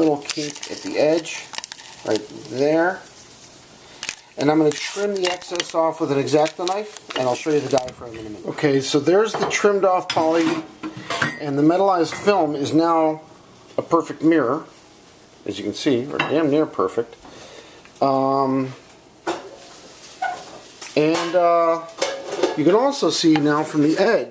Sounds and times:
Speech: 0:00.0 - 0:03.1, 0:04.4 - 0:10.7, 0:11.3 - 0:14.7, 0:15.4 - 0:17.2, 0:18.0 - 0:18.8, 0:21.0 - 0:24.3
Dishes, pots, and pans: 0:22.0 - 0:22.6.

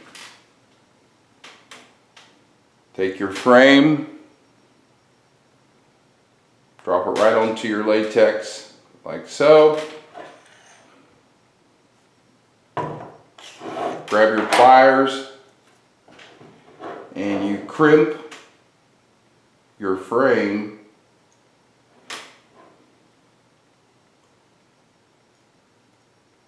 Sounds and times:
Inside, small room: 0:00.0 - 0:26.4
Speech: 0:03.0 - 0:04.2, 0:06.8 - 0:09.9, 0:14.1 - 0:15.4, 0:17.2 - 0:18.3, 0:19.8 - 0:20.9.

